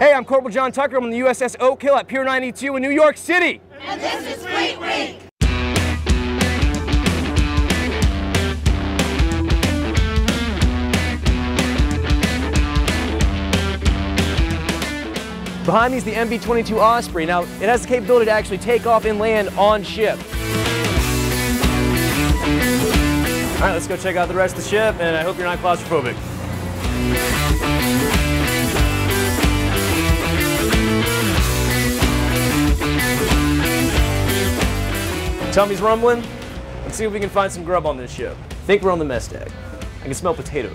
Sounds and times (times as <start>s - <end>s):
Speech: 0.0s - 5.2s, 15.7s - 20.2s, 23.6s - 26.2s, 35.5s - 36.3s, 36.9s - 40.7s
Music: 5.4s - 40.7s.